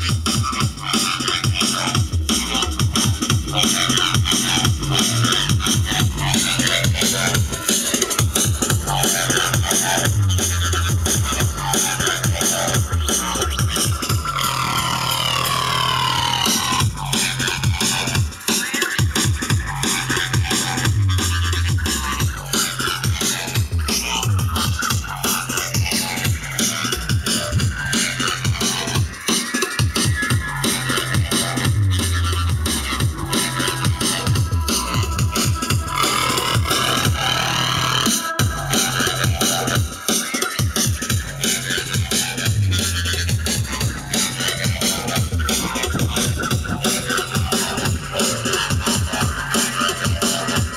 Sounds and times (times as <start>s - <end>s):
Music: 0.0s - 50.7s.